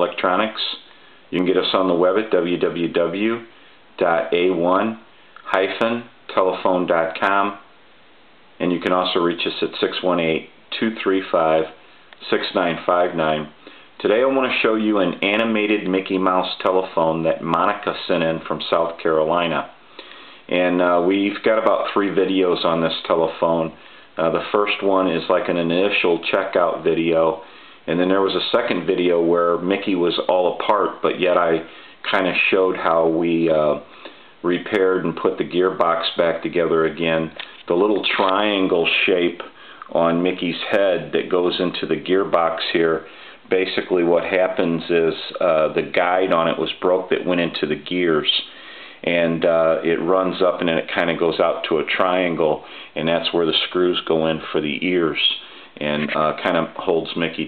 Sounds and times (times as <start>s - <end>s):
Speech: 0.0s - 7.7s, 8.6s - 19.8s, 20.5s - 57.4s.